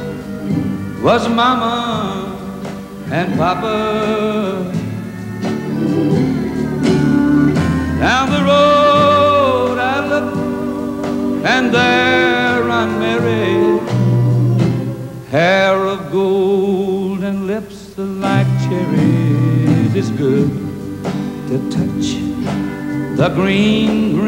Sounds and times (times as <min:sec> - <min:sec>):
Music: 0:00.0 - 0:24.2.